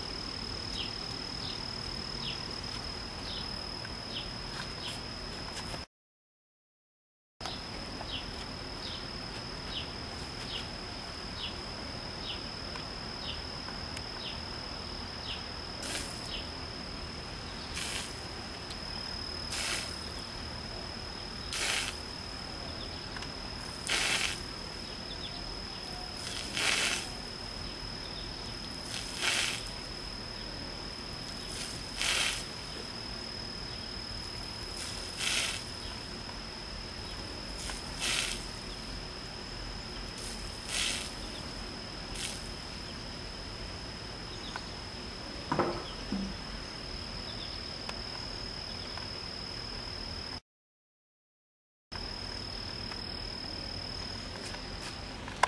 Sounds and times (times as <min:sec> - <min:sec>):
Spray: 0:15.8 - 0:16.4, 0:17.7 - 0:18.3, 0:19.5 - 0:20.2, 0:21.4 - 0:22.1, 0:23.6 - 0:24.6, 0:26.1 - 0:27.4, 0:28.8 - 0:29.9, 0:31.2 - 0:32.8, 0:34.7 - 0:36.1, 0:37.5 - 0:38.9, 0:40.2 - 0:42.8.